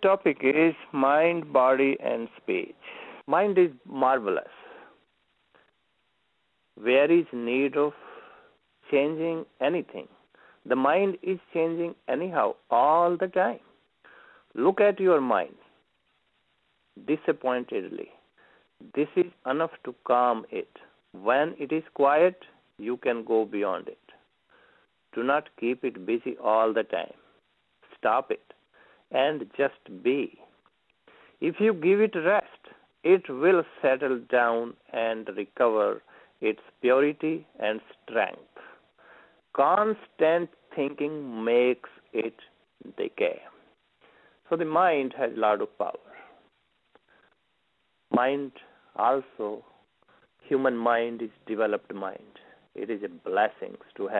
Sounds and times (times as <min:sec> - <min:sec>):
Male speech, man speaking: 0:00.0 - 0:04.6, 0:06.8 - 0:08.0, 0:08.8 - 0:10.1, 0:10.7 - 0:13.6, 0:14.6 - 0:15.7, 0:17.0 - 0:18.2, 0:18.8 - 0:24.2, 0:25.1 - 0:27.2, 0:27.9 - 0:30.5, 0:31.4 - 0:38.6, 0:39.5 - 0:43.6, 0:44.5 - 0:46.3, 0:48.1 - 0:49.7, 0:50.4 - 0:54.1
Narration, monologue: 0:00.0 - 0:54.1.